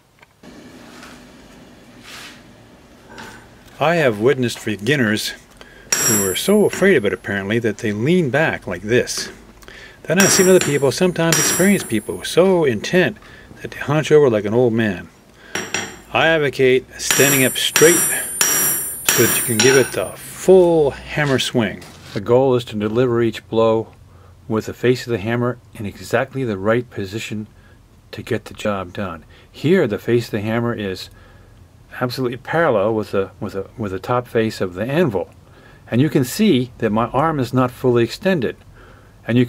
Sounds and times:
Hammer: 5.9 - 7.0, 10.2 - 12.2, 15.6 - 16.0, 17.0 - 20.2.

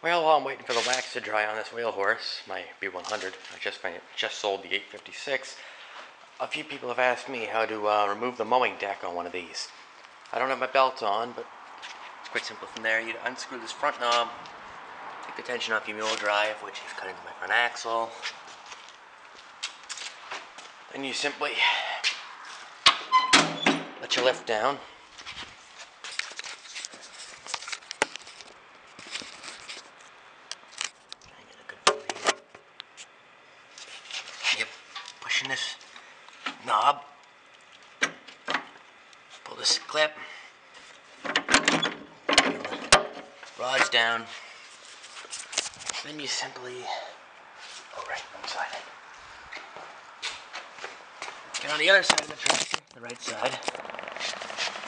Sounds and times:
Speech: 0.0 - 5.6, 6.4 - 11.5, 12.3 - 14.4, 15.4 - 18.3, 20.9 - 22.0, 24.0 - 24.9, 34.4 - 35.8, 36.6 - 37.2, 39.4 - 40.3, 43.6 - 44.4, 46.0 - 47.2, 47.9 - 48.9, 51.6 - 53.7.

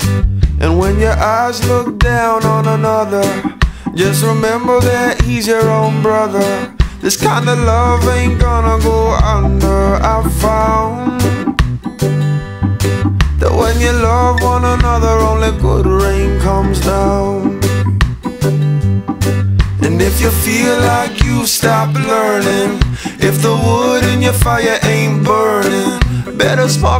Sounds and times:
Music: 0.0 - 26.9.

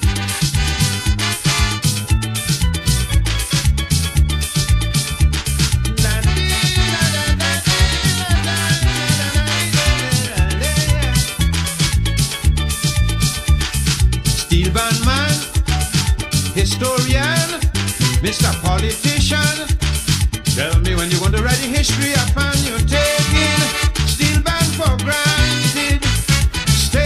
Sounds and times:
Happy music: 0.0 - 27.0
Jazz: 0.0 - 27.0
Middle Eastern music: 0.0 - 27.0.

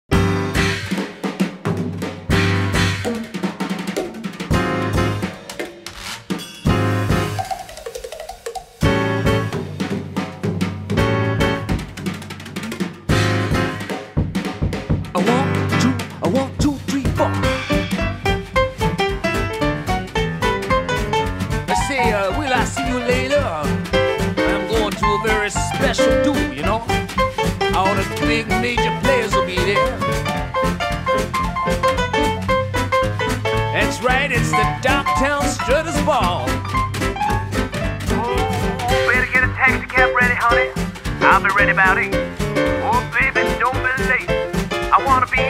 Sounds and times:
Bass drum: 0.1 - 3.3, 4.0 - 5.5, 8.8 - 45.4
Drum kit: 0.1 - 45.4
Drum roll: 0.1 - 45.4.

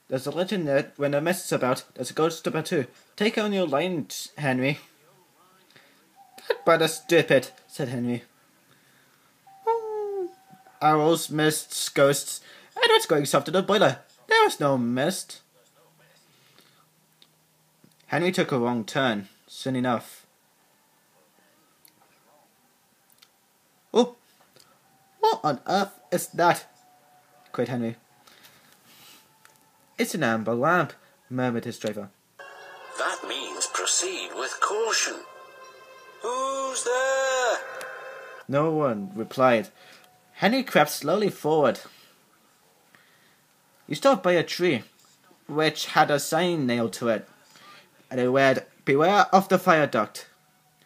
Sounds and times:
Narration, monologue: 0.0 - 5.0, 5.7 - 17.2.

